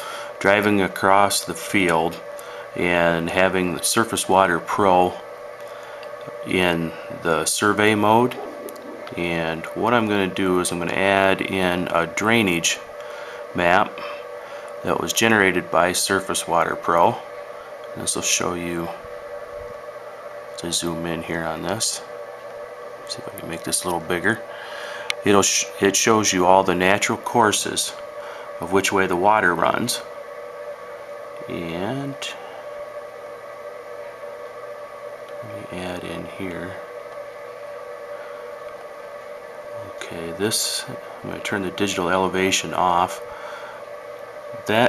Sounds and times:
Speech: 0.4s - 2.2s, 2.8s - 5.2s, 6.3s - 8.4s, 9.1s - 12.9s, 13.6s - 14.1s, 14.8s - 17.3s, 18.0s - 19.0s, 20.6s - 22.1s, 23.1s - 24.4s, 25.2s - 28.0s, 28.6s - 30.1s, 31.4s - 32.4s, 35.4s - 36.8s, 39.8s - 43.2s, 44.5s - 44.8s.

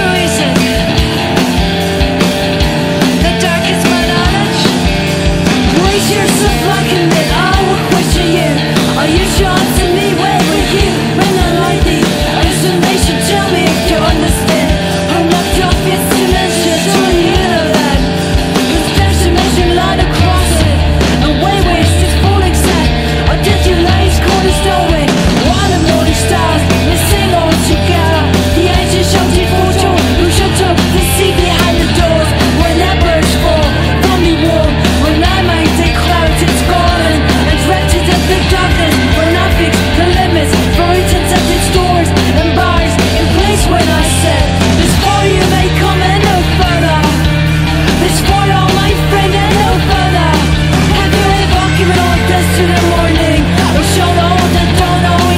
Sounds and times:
Music: 0.0s - 55.3s.

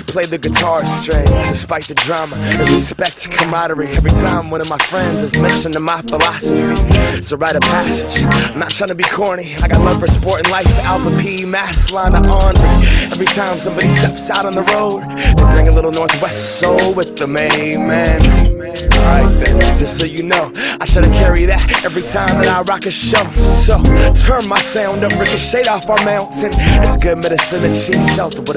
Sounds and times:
Pop music: 0.0s - 28.5s.

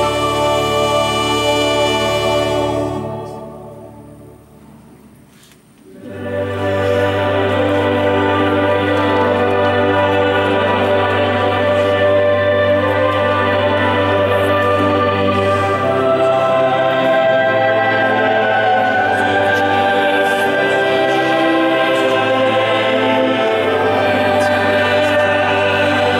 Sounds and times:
Tender music: 0.0s - 4.7s, 6.1s - 26.1s.

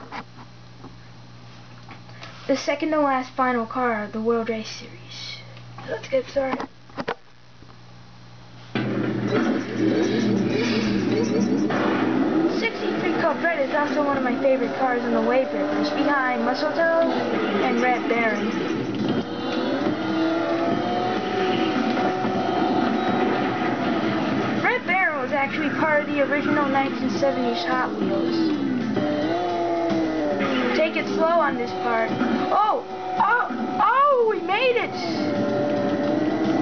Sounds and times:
Speech: 2.5s - 6.7s, 12.6s - 18.5s, 24.6s - 28.6s, 30.7s - 35.3s.

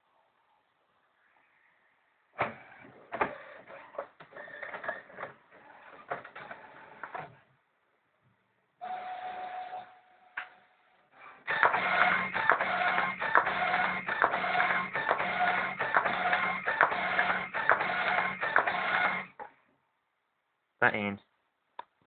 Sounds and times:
Printer: 2.4s - 7.4s, 11.2s - 19.4s
Speech: 20.8s - 21.3s.

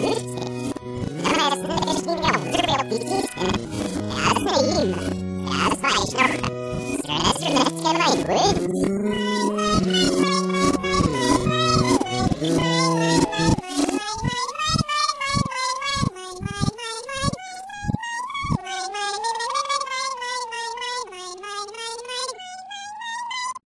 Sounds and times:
Cat: 1.1s - 23.6s.

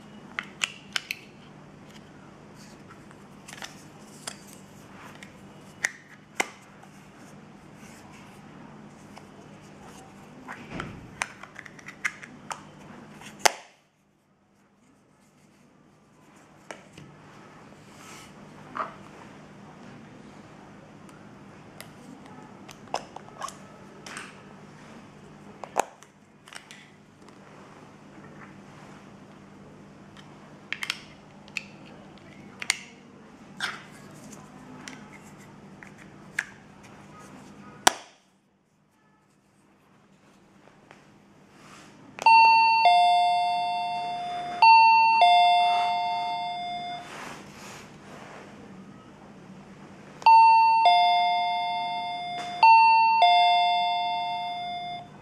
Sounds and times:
Doorbell: 42.3s - 47.2s, 50.3s - 55.2s.

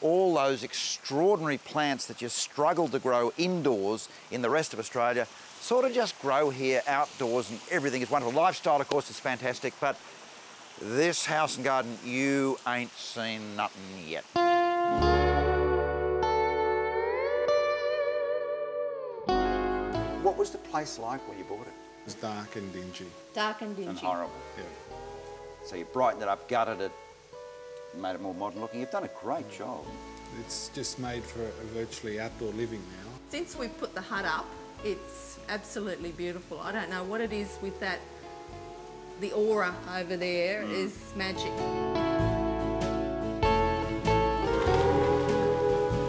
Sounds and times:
Effects unit: 14.4s - 20.4s, 41.3s - 46.0s
Electric guitar: 14.4s - 20.9s, 40.4s - 46.0s.

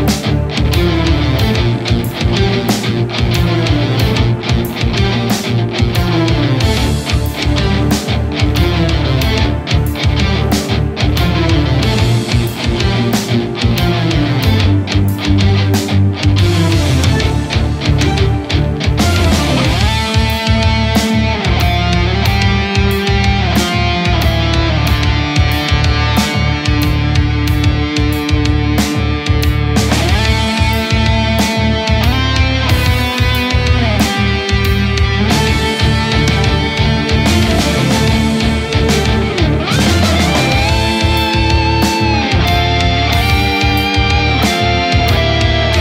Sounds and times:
Bass guitar: 0.0s - 45.8s
Electric guitar: 0.0s - 45.8s.

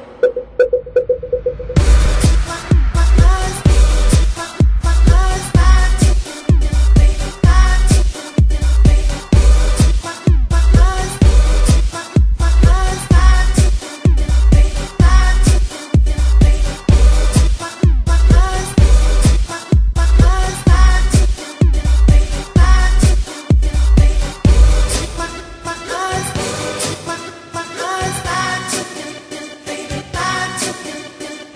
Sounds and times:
House music: 0.2s - 31.5s.

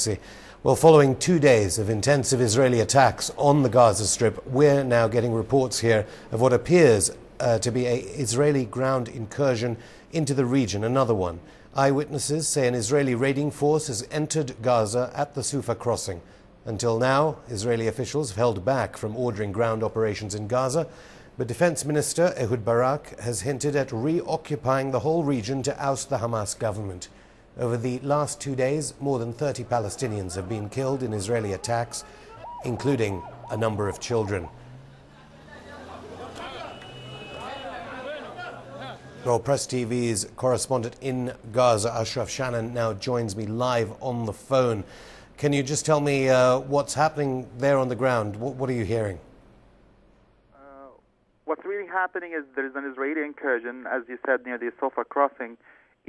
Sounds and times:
Speech: 0.0s - 34.5s, 39.3s - 44.8s, 50.6s - 56.0s.

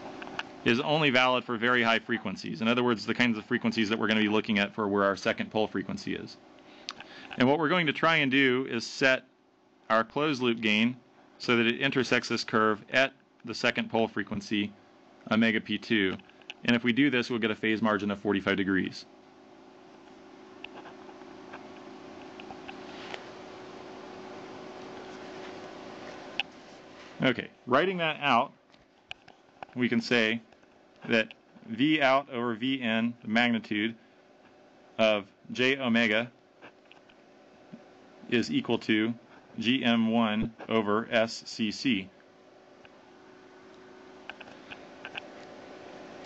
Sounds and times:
Inside, small room: 0.0s - 46.2s
Speech: 0.7s - 6.4s, 7.4s - 9.3s, 9.9s - 19.1s, 27.2s - 28.6s, 29.7s - 30.5s, 31.1s - 34.0s, 35.0s - 36.4s, 38.3s - 42.2s.

